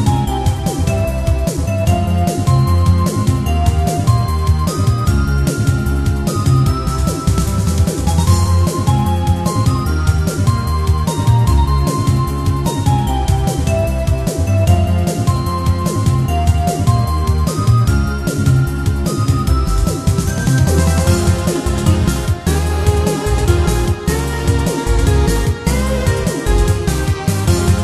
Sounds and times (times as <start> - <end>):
Music: 0.0 - 27.8.